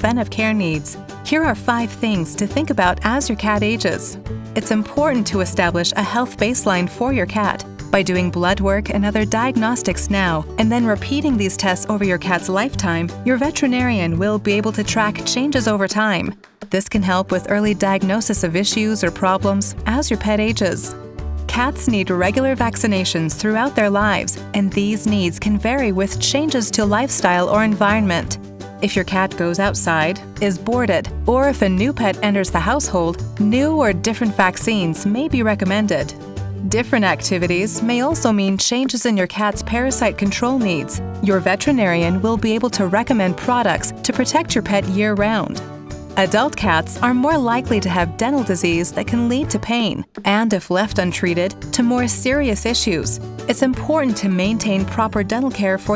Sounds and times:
Speech: 0.0s - 45.6s, 46.2s - 55.9s
Music: 0.0s - 55.9s.

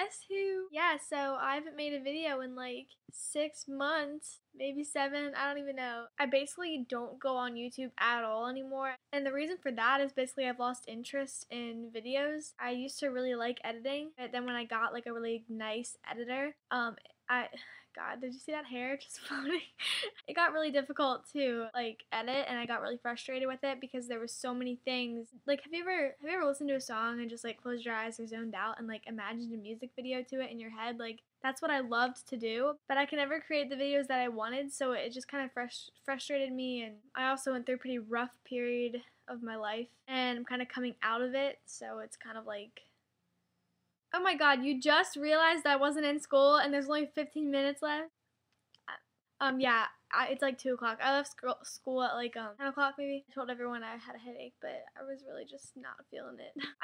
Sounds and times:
Speech: 0.0s - 42.8s, 44.2s - 48.1s, 49.4s - 56.8s.

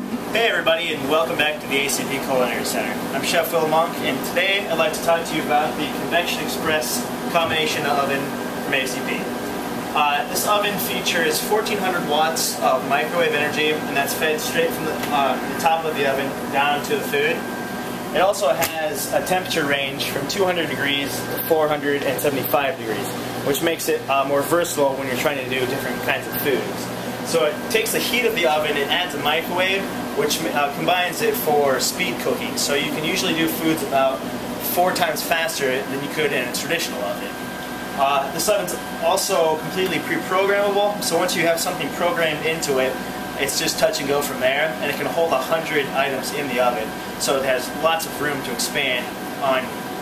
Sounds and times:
Microwave oven: 0.0s - 50.0s
Speech: 0.3s - 9.3s, 9.9s - 17.5s, 18.1s - 37.4s, 38.0s - 49.8s.

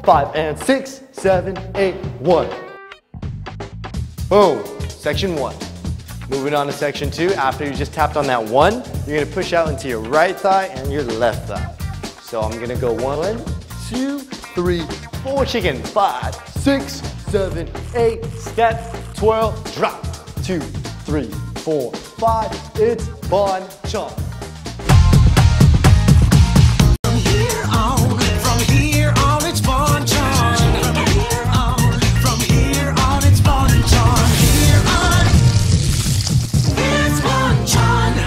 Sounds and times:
Speech: 0.0s - 2.6s, 4.3s - 5.6s, 6.3s - 24.3s
Music: 0.0s - 38.2s.

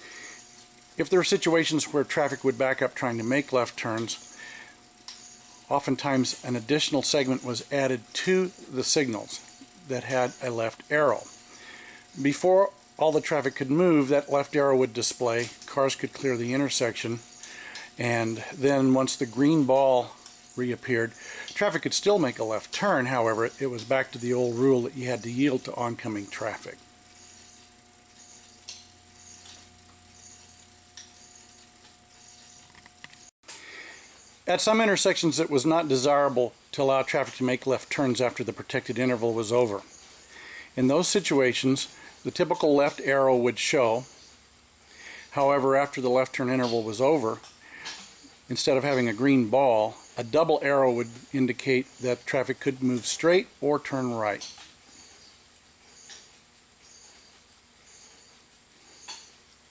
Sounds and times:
Speech: 1.0s - 4.2s, 5.7s - 11.3s, 12.2s - 17.2s, 18.0s - 26.8s, 34.5s - 39.9s, 40.8s - 44.1s, 45.3s - 47.5s, 48.5s - 54.6s.

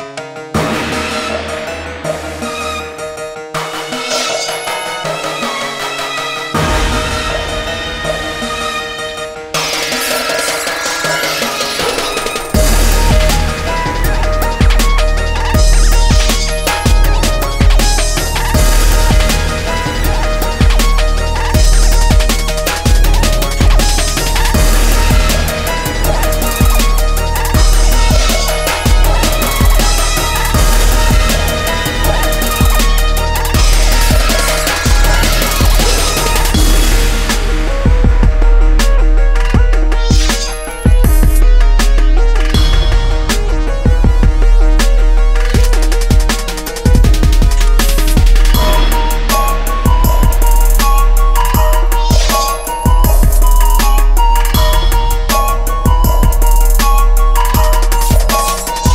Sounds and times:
Music: 0.0s - 58.9s.

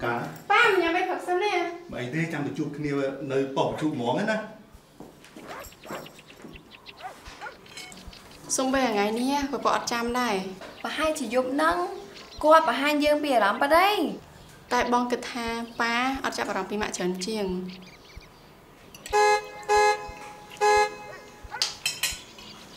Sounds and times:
Vehicle horn, car horn, honking: 19.1s - 21.5s.

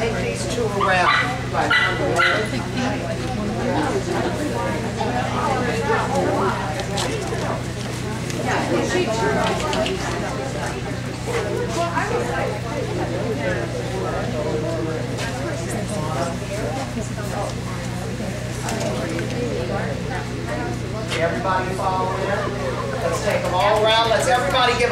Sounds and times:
Speech: 0.0s - 24.9s.

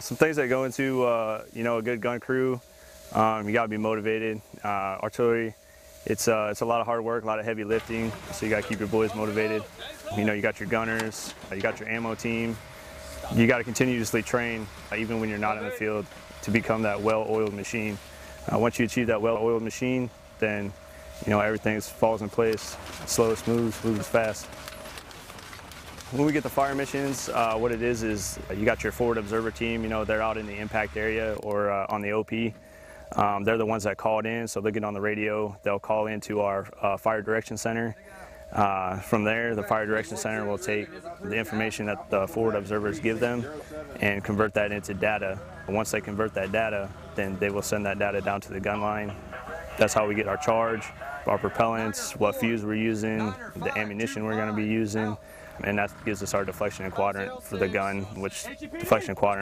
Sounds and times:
Speech: 0.0s - 12.6s, 13.2s - 24.4s, 26.1s - 32.6s, 33.2s - 59.4s.

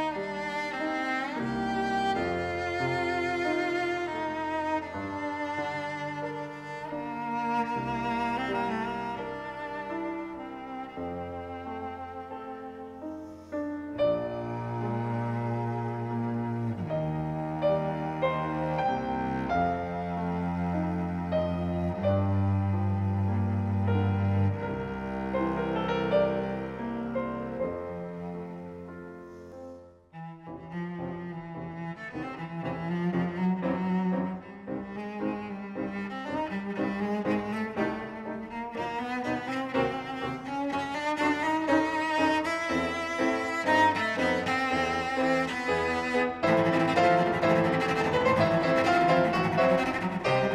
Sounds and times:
Cello: 0.0s - 50.5s
Classical music: 0.0s - 50.5s
Piano: 0.0s - 50.5s.

